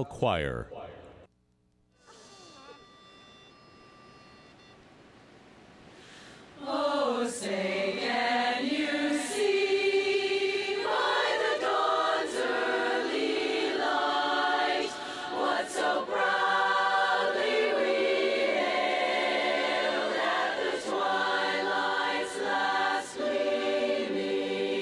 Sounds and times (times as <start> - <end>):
Speech: 0.0 - 1.0
Choir: 6.5 - 24.8.